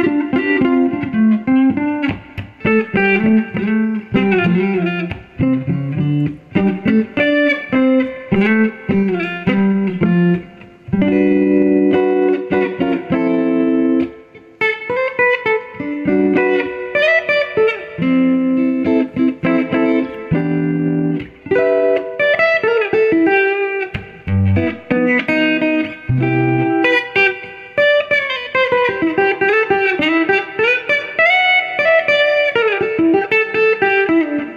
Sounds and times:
Distortion: 0:00.0 - 0:34.5
Music: 0:00.0 - 0:34.5.

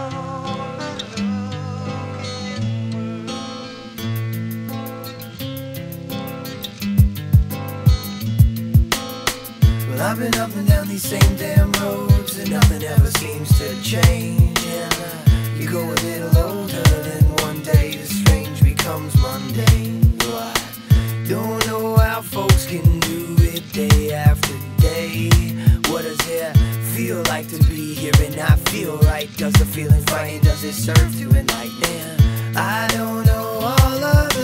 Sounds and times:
Rhythm and blues: 0:03.9 - 0:34.4.

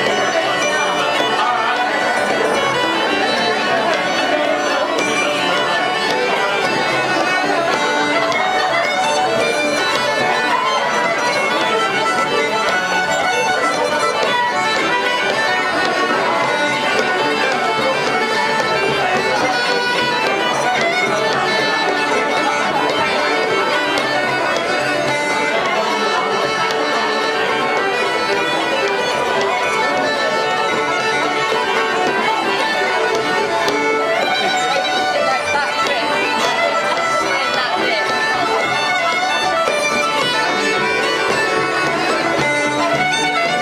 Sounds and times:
Violin, fiddle: 0:00.0 - 0:43.6.

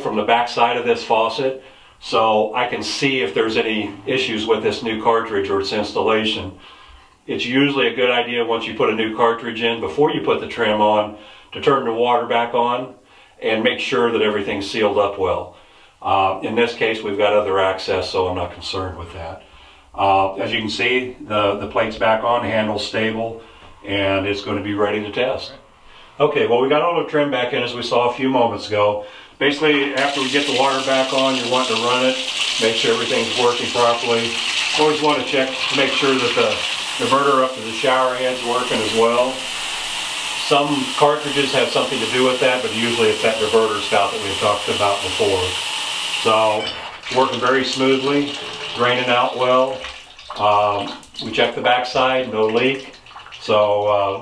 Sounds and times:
Speech: 0:00.0 - 0:06.6, 0:07.3 - 0:19.4, 0:20.0 - 0:25.6, 0:26.2 - 0:39.5, 0:40.4 - 0:45.6, 0:46.2 - 0:54.2
Bathtub (filling or washing): 0:00.0 - 0:06.7, 0:29.4 - 0:54.2
Water tap, faucet: 0:30.0 - 0:53.9.

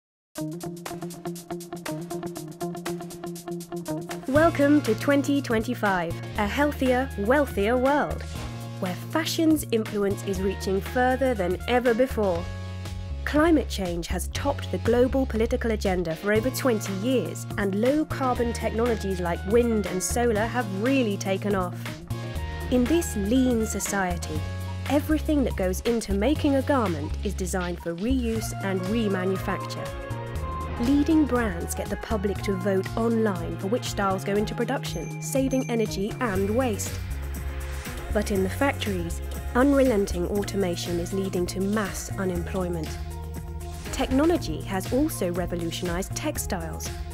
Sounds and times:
Music: 0:00.4 - 0:47.1
Speech: 0:04.3 - 0:08.2, 0:08.8 - 0:12.4, 0:13.3 - 0:21.9, 0:22.7 - 0:29.9, 0:30.8 - 0:37.0, 0:38.1 - 0:43.0, 0:43.9 - 0:46.9.

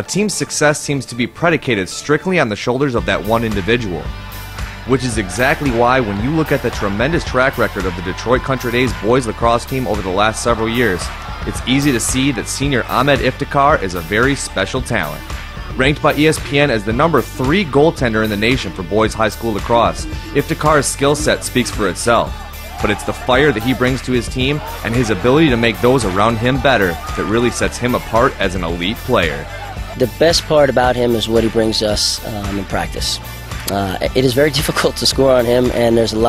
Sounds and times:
Speech: 0:00.0 - 0:04.1, 0:04.9 - 0:36.2
Music: 0:00.0 - 0:36.2.

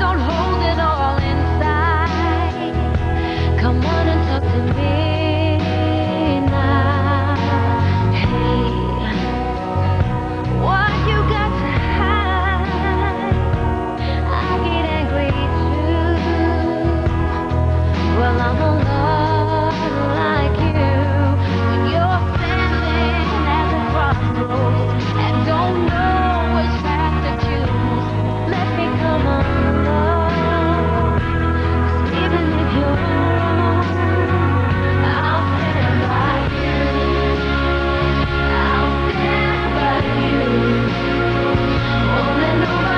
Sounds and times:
Pop music: 0:00.0 - 0:42.9
Singing: 0:18.0 - 0:42.9.

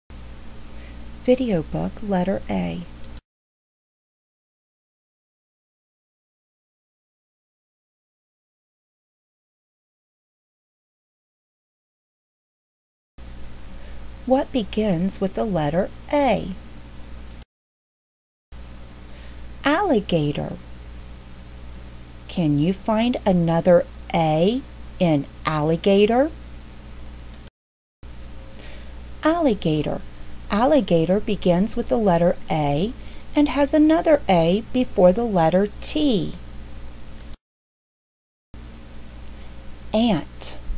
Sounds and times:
Speech: 0:01.3 - 0:02.9, 0:14.3 - 0:16.6, 0:19.7 - 0:20.6, 0:22.3 - 0:26.4, 0:29.2 - 0:36.4, 0:40.0 - 0:40.7.

